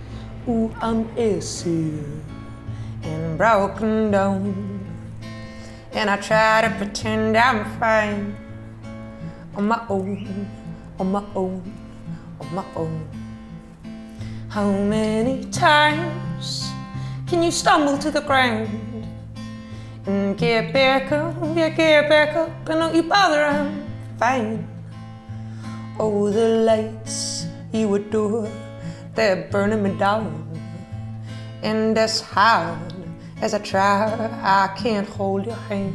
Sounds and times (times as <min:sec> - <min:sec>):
Music: 0:00.0 - 0:35.9.